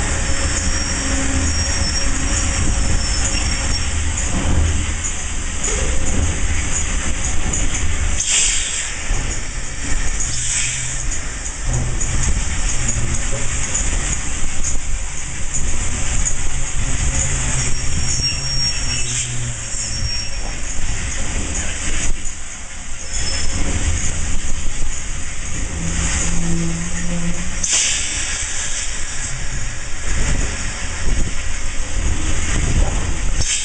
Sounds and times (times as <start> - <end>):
Hiss: 0.0 - 33.6.